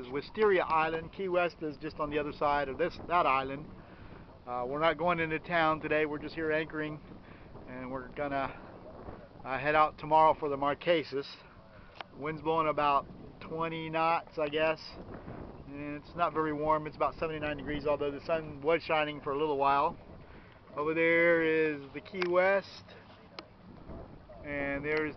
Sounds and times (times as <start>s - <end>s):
Speech: 0.0s - 3.6s, 4.5s - 7.0s, 9.5s - 11.4s, 12.2s - 15.0s, 15.7s - 20.0s, 20.7s - 22.9s, 24.4s - 25.1s.